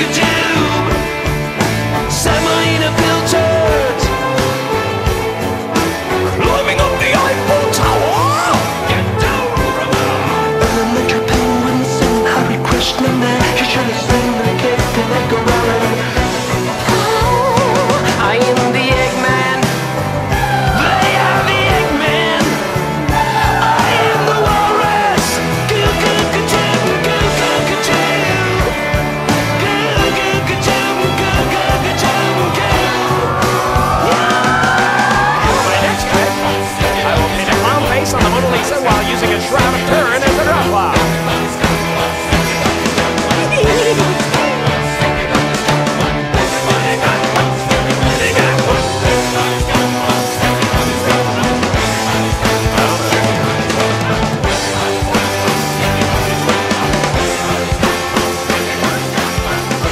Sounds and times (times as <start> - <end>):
Rock music: 0.0 - 59.9.